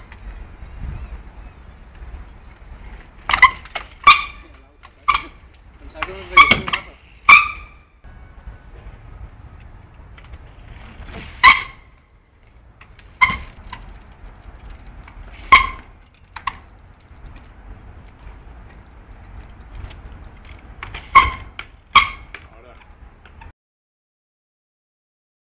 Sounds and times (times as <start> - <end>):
Speech: 5.8 - 7.0, 22.5 - 22.9.